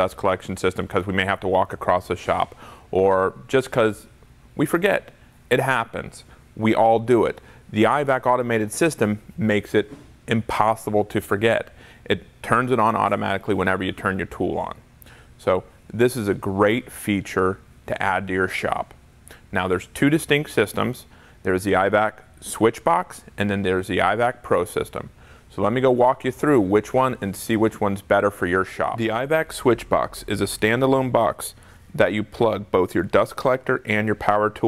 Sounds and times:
Speech: 0.0s - 14.8s, 15.4s - 34.6s.

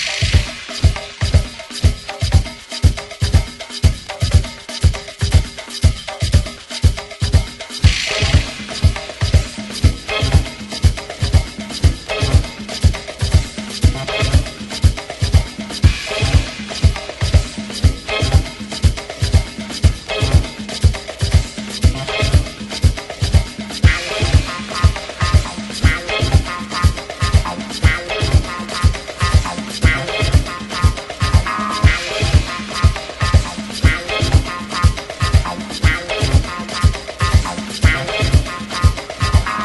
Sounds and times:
Music: 0.0s - 39.6s.

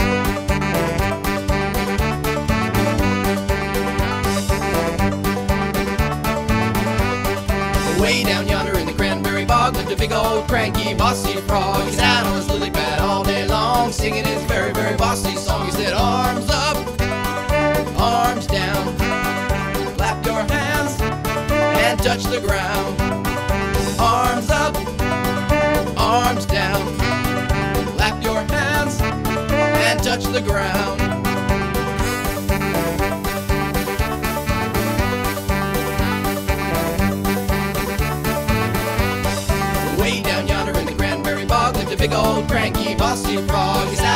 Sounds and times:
Music: 0.0s - 44.1s.

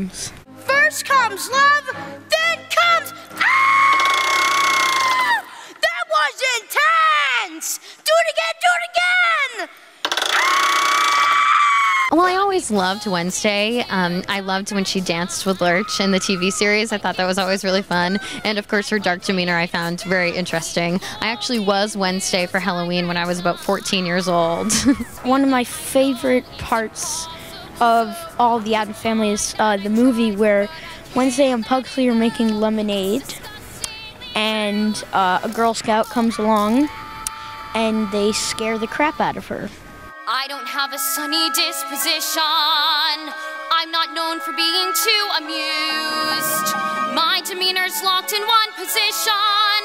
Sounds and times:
Speech: 0.0s - 3.2s, 12.1s - 33.4s, 34.4s - 36.9s, 37.8s - 40.6s
Music: 0.0s - 5.6s, 12.1s - 49.8s.

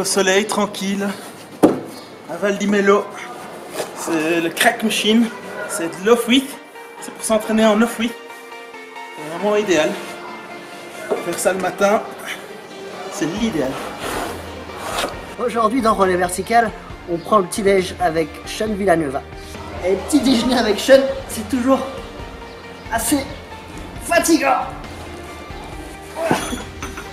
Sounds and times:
Music: 3.2s - 27.1s.

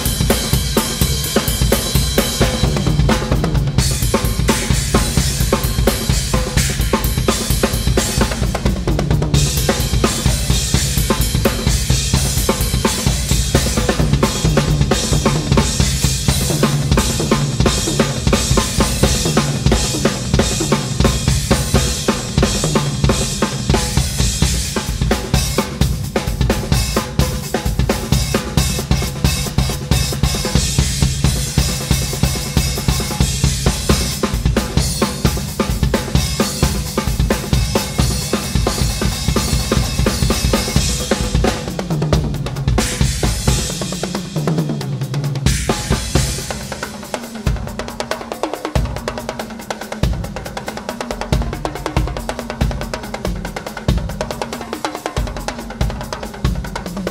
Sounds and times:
Drum: 0.0s - 57.1s
Drum kit: 0.0s - 57.1s.

